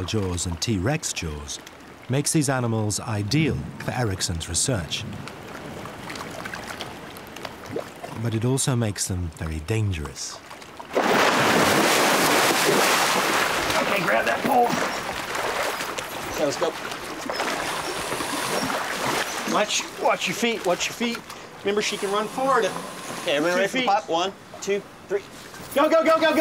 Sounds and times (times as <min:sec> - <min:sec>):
Speech: 0:00.0 - 0:05.2, 0:08.2 - 0:10.4, 0:19.5 - 0:26.4
Water: 0:00.0 - 0:26.4.